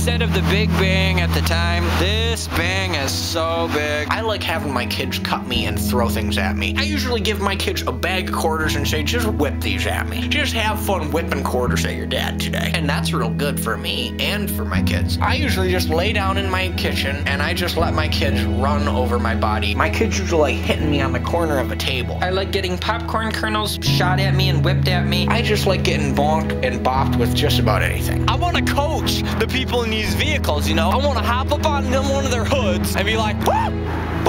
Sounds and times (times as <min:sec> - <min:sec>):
Music: 0:00.0 - 0:34.2
Speech: 0:00.0 - 0:34.2.